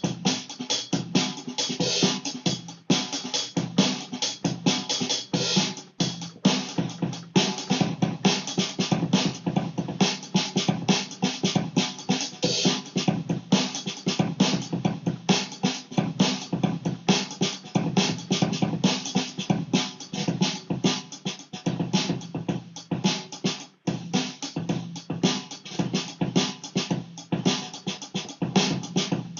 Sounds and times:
Drum: 0.0 - 29.3.

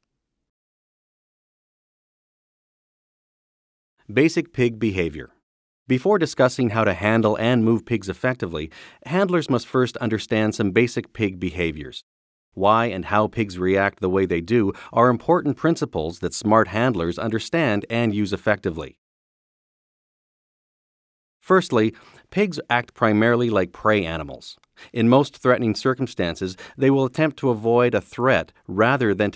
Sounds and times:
Speech: 4.1 - 12.0, 12.6 - 19.0, 21.4 - 29.3.

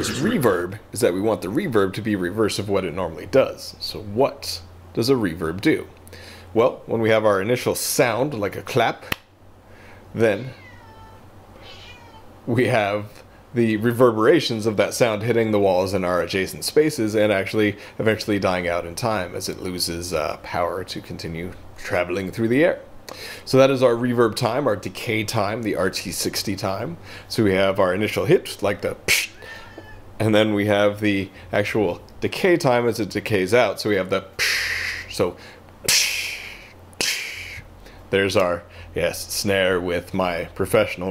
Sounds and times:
Speech: 0.0 - 5.9, 6.6 - 9.2, 10.2 - 10.6, 12.5 - 22.9, 23.5 - 29.3, 30.2 - 34.4, 35.0 - 41.1.

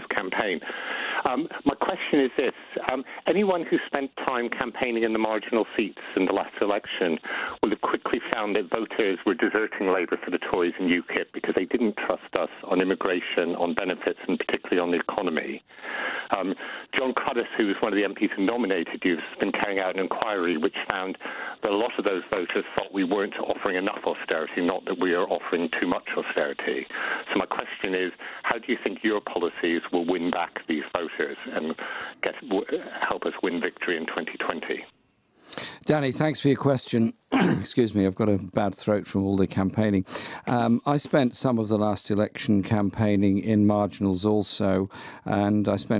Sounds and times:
Speech: 0.0 - 15.6, 16.3 - 34.9, 35.6 - 45.9
Radio: 0.0 - 35.0.

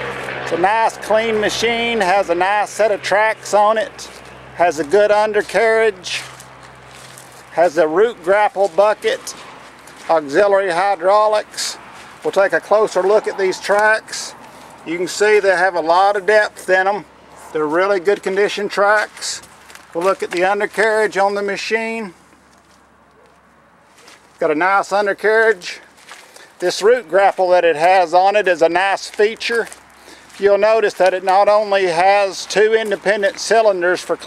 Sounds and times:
Speech: 0.5 - 6.4, 7.6 - 9.4, 10.1 - 22.2, 24.4 - 25.9, 26.6 - 29.8, 30.4 - 34.2.

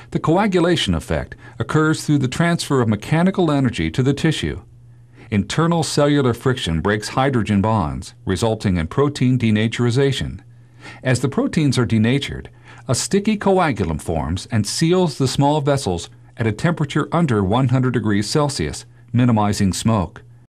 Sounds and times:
Speech: 0.0 - 20.3.

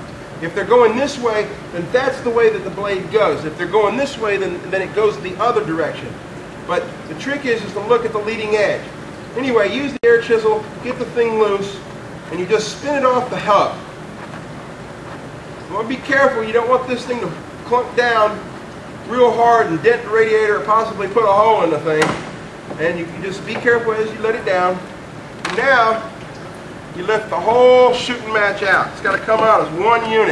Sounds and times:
Speech: 0.4 - 13.8, 15.7 - 18.5, 19.1 - 22.2, 22.8 - 24.9, 25.5 - 26.1, 26.9 - 30.3.

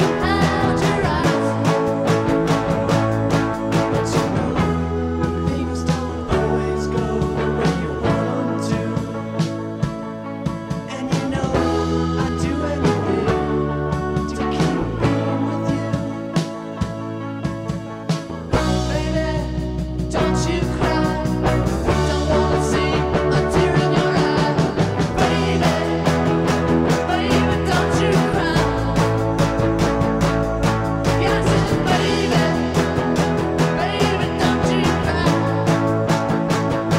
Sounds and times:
Music: 0.0 - 36.9.

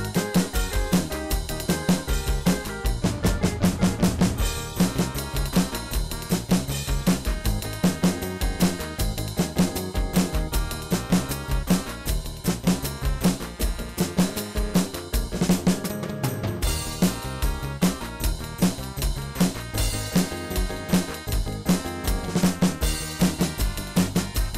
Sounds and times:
Drum: 0.0 - 24.5
Drum kit: 0.0 - 24.5.

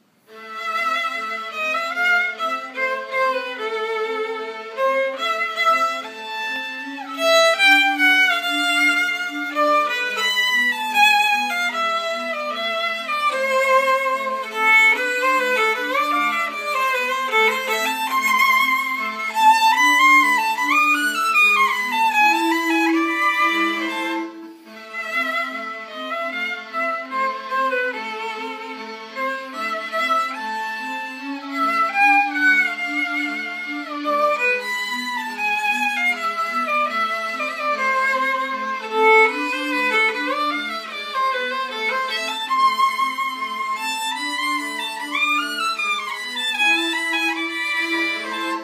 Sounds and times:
Violin, fiddle: 0.0 - 48.6.

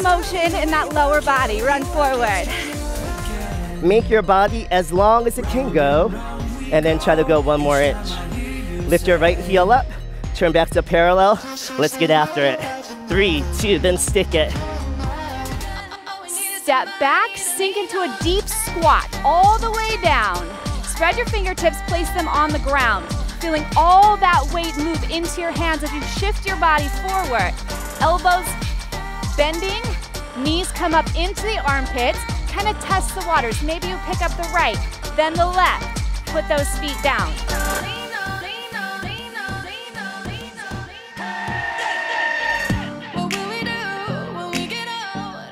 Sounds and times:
Speech: 3.8 - 6.1, 6.8 - 8.2, 8.9 - 9.8, 10.4 - 14.6, 16.4 - 28.5, 29.4 - 35.8.

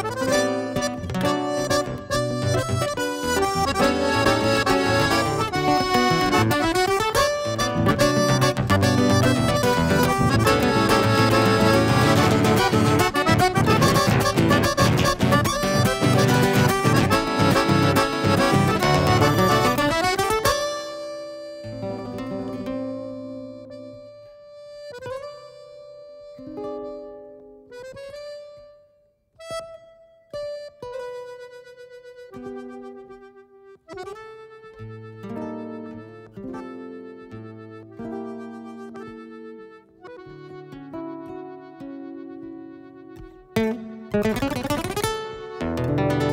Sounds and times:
Accordion: 0.0 - 46.3
Acoustic guitar: 0.0 - 46.3.

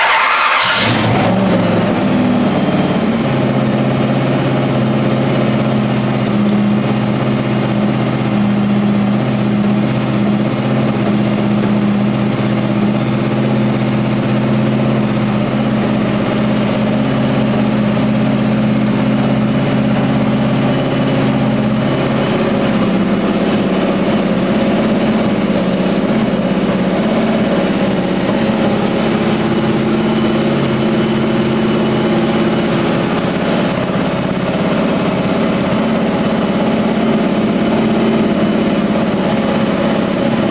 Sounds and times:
Heavy engine (low frequency): 0.0 - 40.5
Idling: 0.0 - 40.5.

